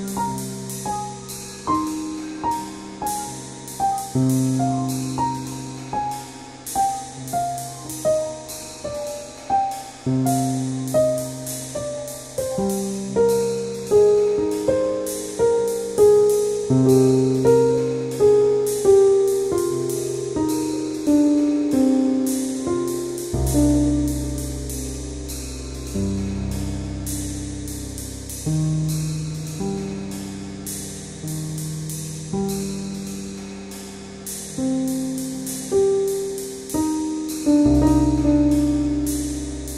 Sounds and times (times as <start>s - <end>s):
New-age music: 0.0s - 39.7s
Piano: 0.0s - 39.7s.